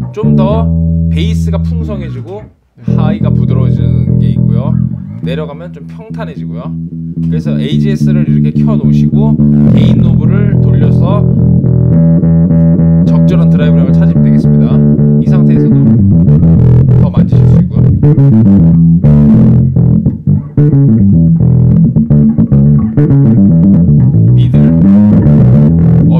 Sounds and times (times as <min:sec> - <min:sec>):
Speech: 0:00.0 - 0:11.4, 0:13.1 - 0:16.0, 0:16.9 - 0:18.0, 0:24.4 - 0:24.8
Bass guitar: 0:00.0 - 0:26.1
Effects unit: 0:00.0 - 0:26.1.